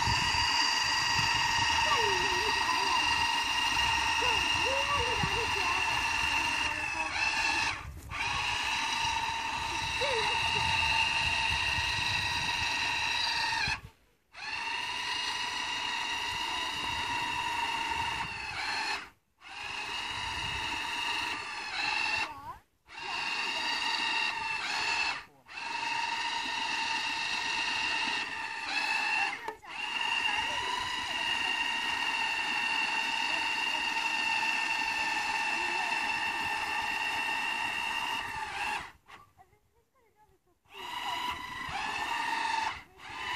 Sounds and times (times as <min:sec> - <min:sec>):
Outside, rural or natural: 0:00.0 - 0:43.3
Speech: 0:01.8 - 0:03.1, 0:04.2 - 0:06.0, 0:09.8 - 0:10.7, 0:30.3 - 0:31.2, 0:35.5 - 0:36.1, 0:39.2 - 0:41.2.